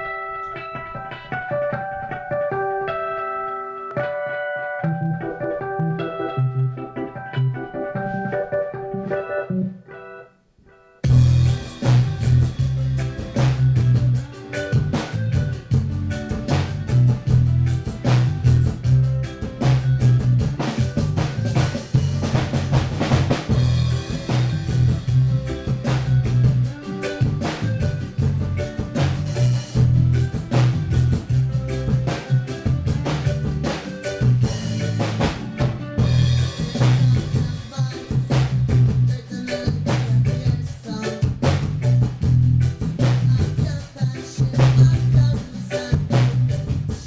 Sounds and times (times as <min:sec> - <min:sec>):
Drum kit: 0:00.0 - 0:10.0, 0:11.0 - 0:47.0
Rimshot: 0:11.1 - 0:39.2, 0:41.1 - 0:43.7
Bass drum: 0:11.1 - 0:47.0
Hi-hat: 0:11.1 - 0:47.0.